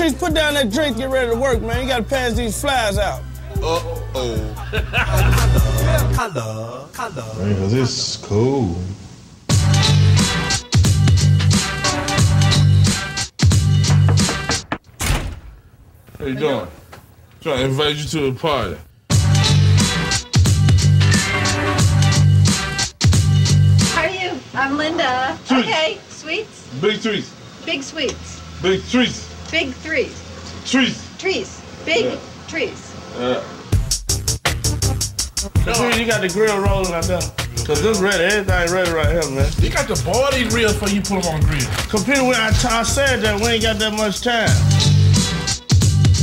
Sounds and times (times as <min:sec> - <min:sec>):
Music: 0:00.0 - 0:07.6, 0:09.5 - 0:14.8, 0:19.0 - 0:25.2, 0:33.5 - 0:46.2
Speech: 0:35.6 - 0:44.6.